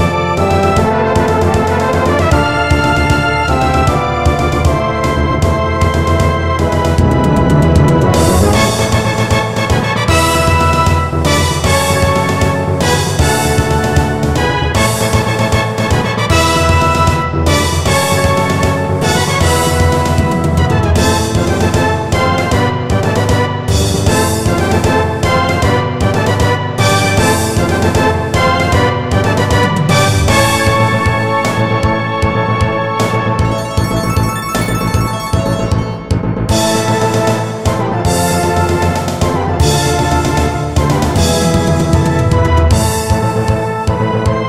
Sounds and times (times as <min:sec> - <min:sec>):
Music: 0:00.0 - 0:44.4.